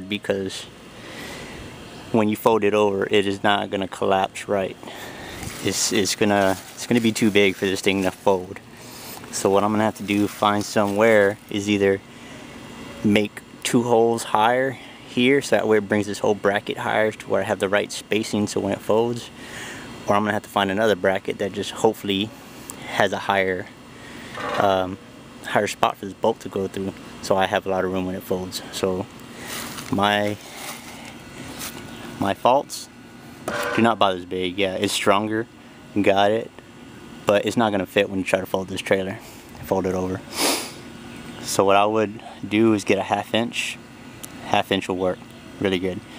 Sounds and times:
Speech: 0.0s - 0.8s, 2.1s - 4.8s, 5.6s - 8.6s, 9.3s - 12.0s, 12.9s - 19.4s, 20.1s - 23.8s, 24.6s - 29.2s, 29.8s - 30.5s, 32.2s - 32.9s, 33.7s - 36.6s, 37.2s - 40.3s, 41.4s - 43.8s, 44.4s - 46.1s.

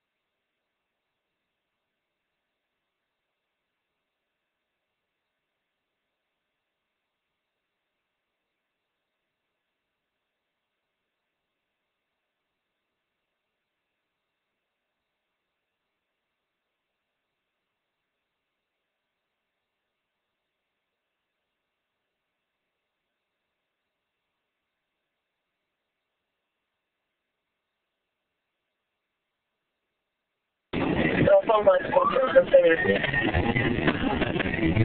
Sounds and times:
Speech: 31.0s - 34.8s.

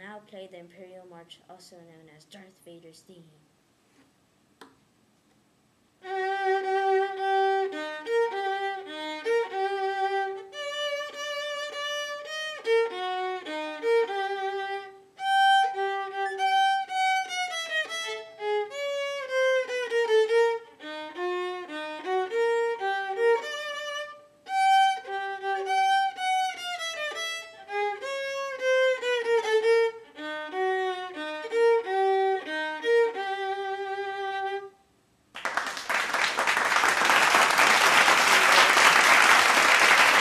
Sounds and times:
Violin, fiddle: 6.0s - 34.8s.

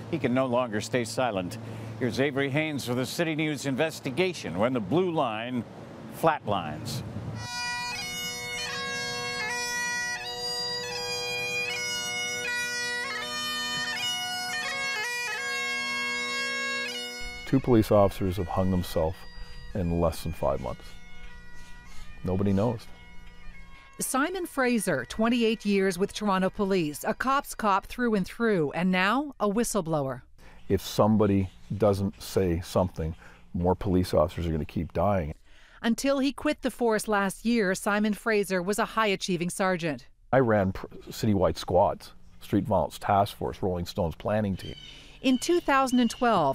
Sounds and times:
Speech: 0.1s - 5.6s, 6.2s - 7.0s, 17.5s - 19.2s, 22.3s - 22.8s, 24.0s - 46.5s
Music: 7.4s - 28.1s.

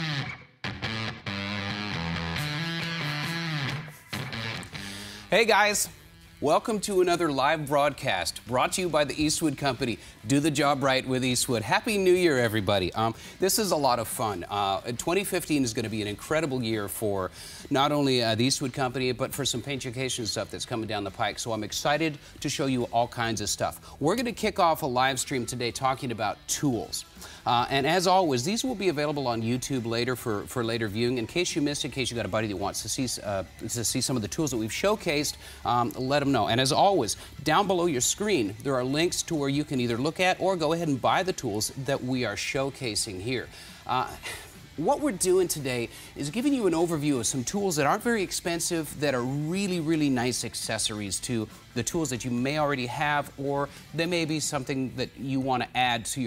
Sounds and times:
Speech: 5.3s - 44.2s, 44.8s - 56.2s.

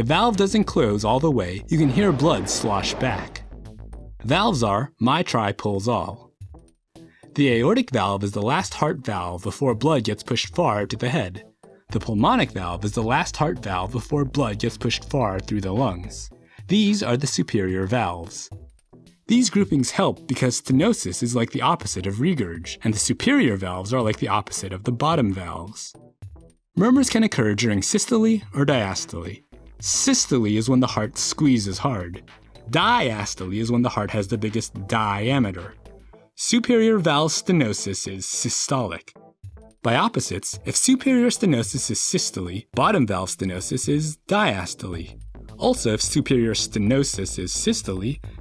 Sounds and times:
Narration, monologue: 0.0s - 48.4s.

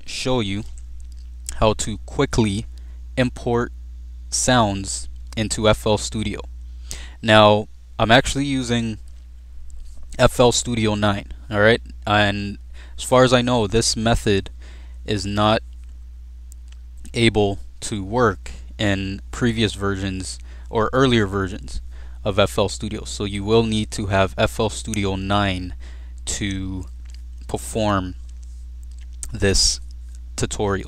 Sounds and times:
Speech: 0.0s - 0.8s, 1.5s - 3.7s, 4.3s - 6.5s, 7.2s - 9.0s, 10.1s - 14.5s, 15.1s - 15.6s, 17.1s - 26.9s, 27.5s - 28.2s, 29.2s - 30.8s.

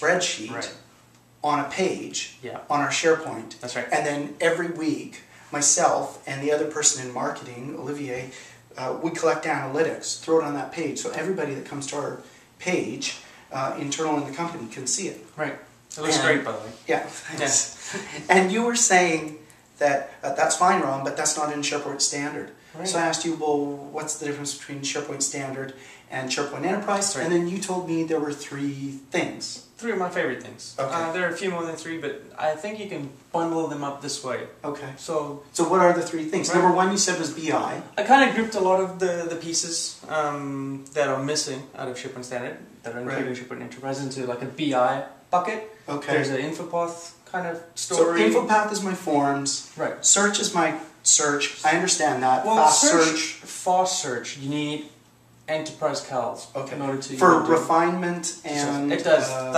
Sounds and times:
Speech: 0.0s - 59.5s.

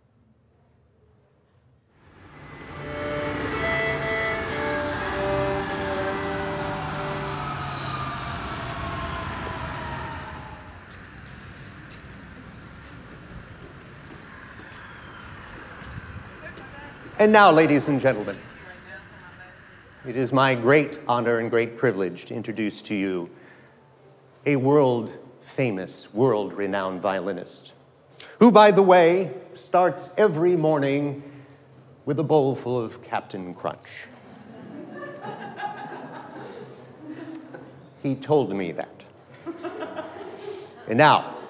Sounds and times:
Speech: 16.4s - 23.3s, 24.5s - 27.8s, 28.4s - 31.2s, 32.1s - 34.1s, 38.0s - 39.1s, 40.8s - 41.4s.

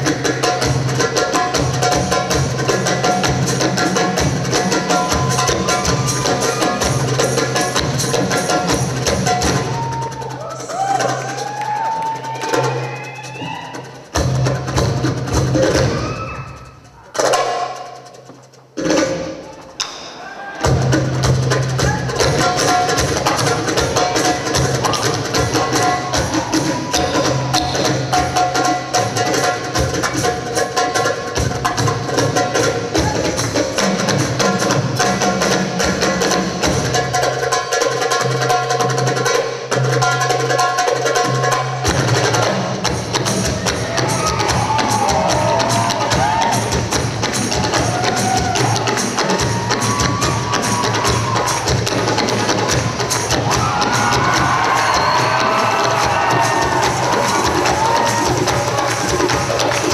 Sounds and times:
Music: 0.0s - 59.9s.

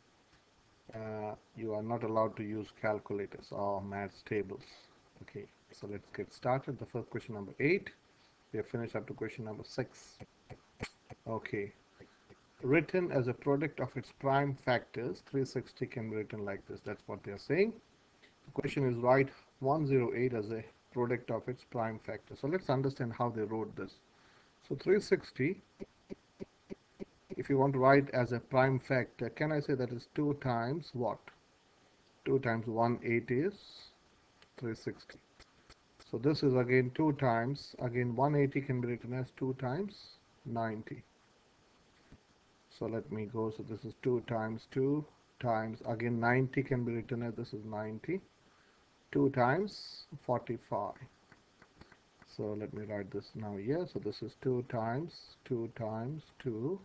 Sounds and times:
Speech: 0.9s - 8.0s, 8.6s - 11.8s, 12.6s - 17.8s, 18.5s - 24.0s, 24.6s - 25.7s, 27.3s - 31.4s, 32.2s - 34.0s, 34.6s - 35.2s, 36.0s - 41.1s, 42.7s - 48.3s, 49.1s - 51.1s, 52.2s - 56.8s.

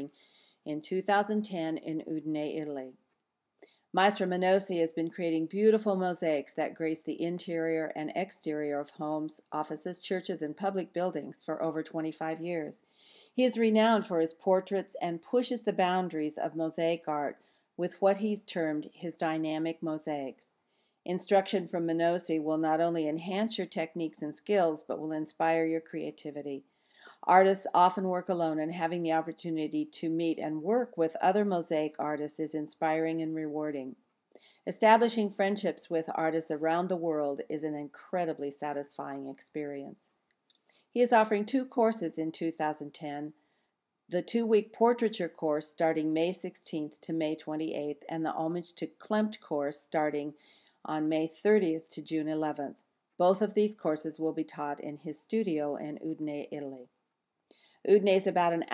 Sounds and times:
Speech: 0.7s - 2.9s, 4.0s - 12.8s, 13.4s - 20.5s, 21.1s - 26.6s, 27.2s - 34.0s, 34.7s - 40.0s, 41.0s - 43.3s, 44.1s - 56.9s, 57.9s - 58.7s.

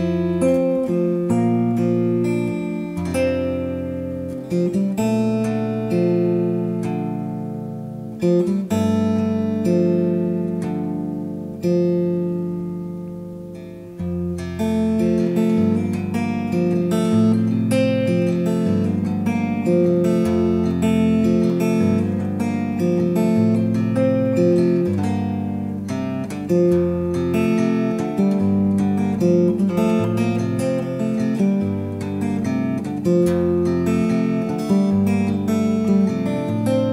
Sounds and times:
Strum: 0.0s - 36.9s.

